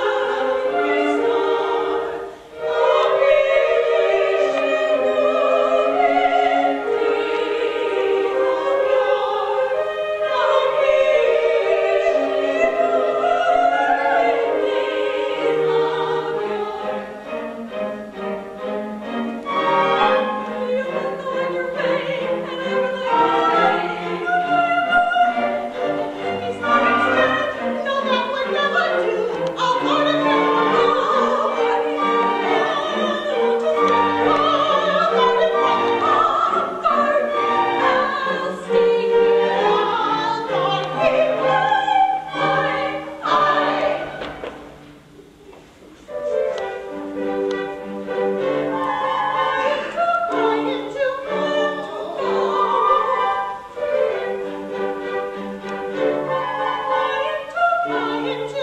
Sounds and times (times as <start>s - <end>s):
Choir: 0.0s - 45.0s, 46.1s - 58.6s.